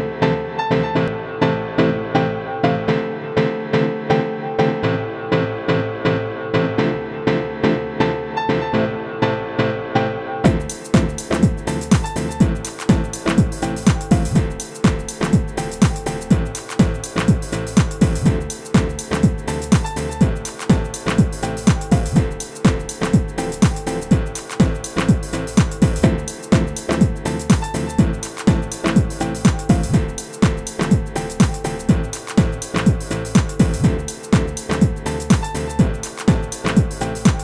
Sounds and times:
Music: 0.0s - 37.4s.

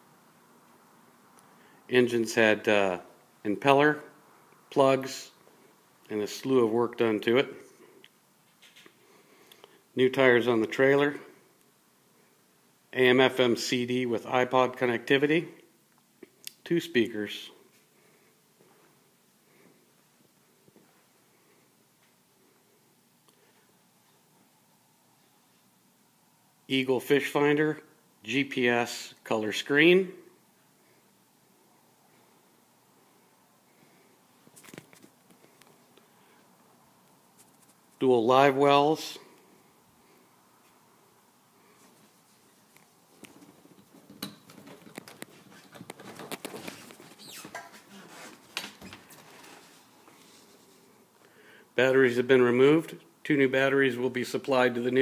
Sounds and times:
Speech: 1.9s - 5.4s, 6.1s - 7.7s, 10.0s - 11.4s, 12.9s - 15.6s, 16.6s - 17.6s, 26.7s - 30.3s, 38.0s - 39.3s, 51.8s - 55.0s.

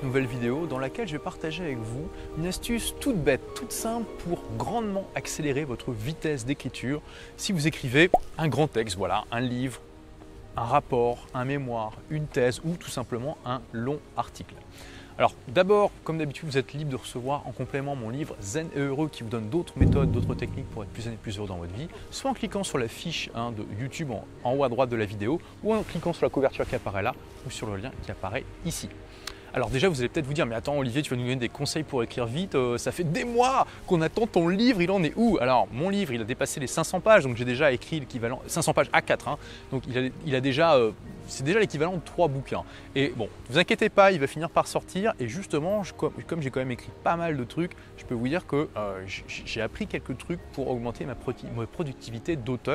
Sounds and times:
Speech: 0.0s - 9.8s, 10.6s - 14.6s, 15.2s - 52.7s
Music: 0.0s - 52.7s.

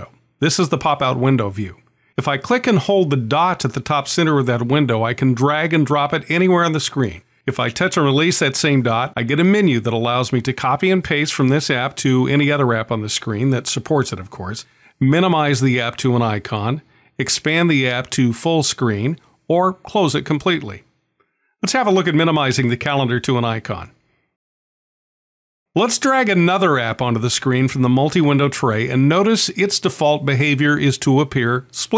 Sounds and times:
Speech: 0.0s - 20.9s, 21.6s - 24.0s, 25.8s - 31.9s.

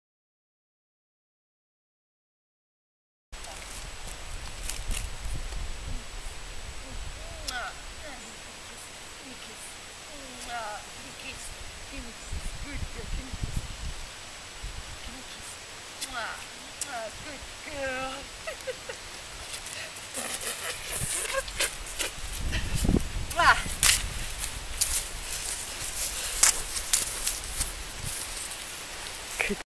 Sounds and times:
Clip-clop: 19.4s - 29.6s.

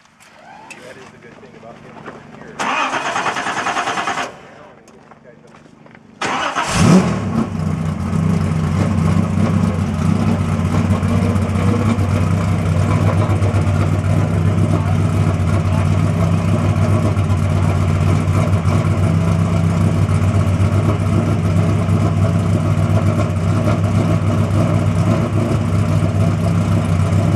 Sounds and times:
Truck: 0.0s - 27.3s
Speech: 0.6s - 2.6s, 4.4s - 5.7s, 14.3s - 16.0s
Engine starting: 2.6s - 4.7s, 6.2s - 7.6s.

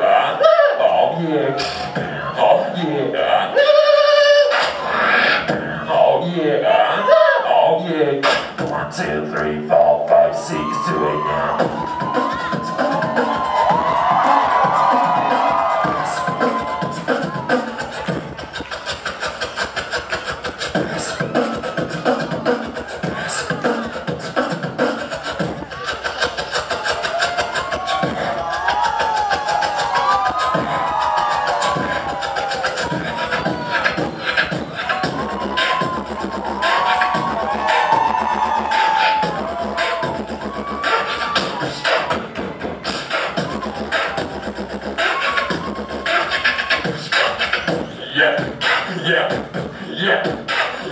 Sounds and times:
Beatboxing: 0.0s - 50.9s.

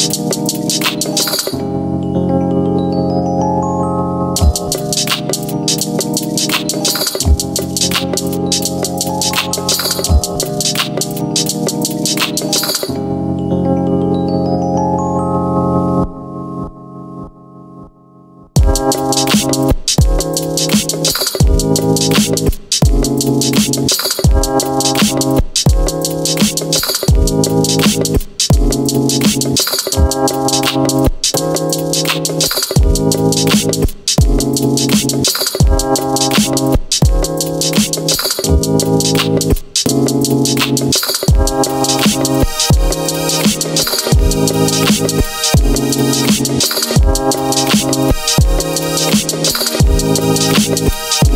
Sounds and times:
Dance music: 0.0s - 1.6s, 4.4s - 12.9s, 18.6s - 51.3s.

